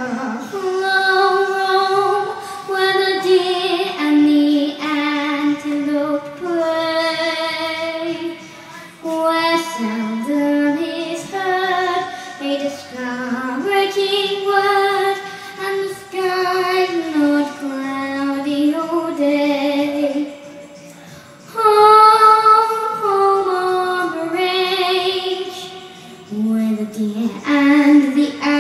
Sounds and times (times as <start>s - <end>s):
Child singing: 0.0s - 20.7s, 21.5s - 28.6s
Music: 0.0s - 28.6s.